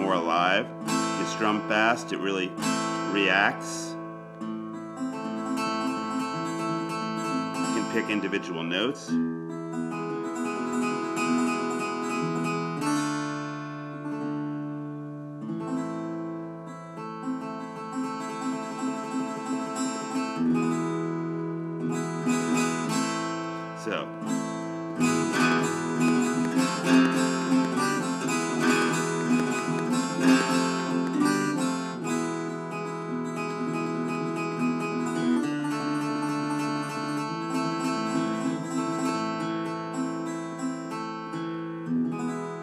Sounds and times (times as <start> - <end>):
Acoustic guitar: 0.0 - 42.6.